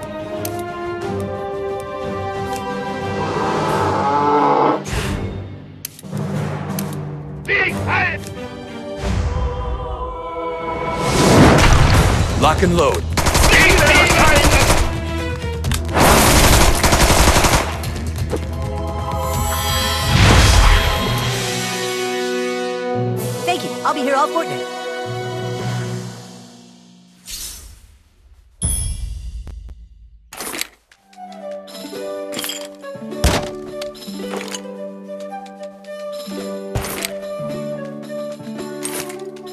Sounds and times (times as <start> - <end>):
Machine gun: 13.2 - 15.0, 16.0 - 17.8.